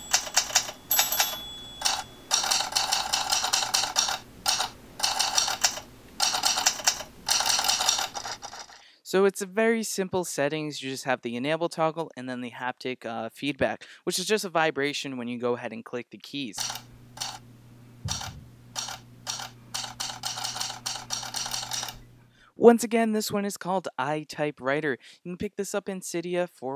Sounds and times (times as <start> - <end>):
Speech: 9.0 - 16.6, 22.6 - 26.7.